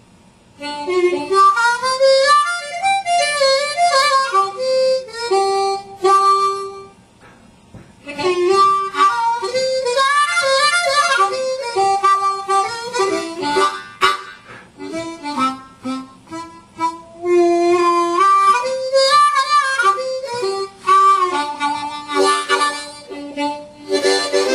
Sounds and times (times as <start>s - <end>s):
Harmonica: 0.6s - 24.5s.